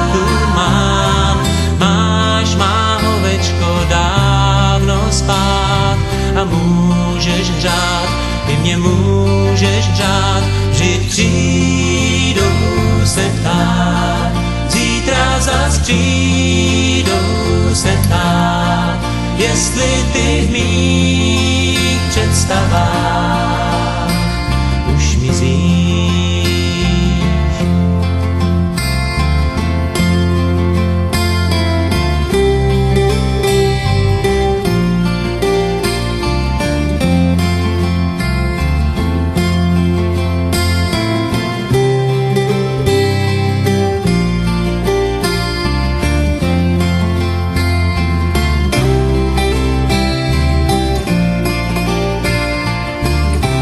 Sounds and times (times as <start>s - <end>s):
Christian music: 0.0s - 53.6s.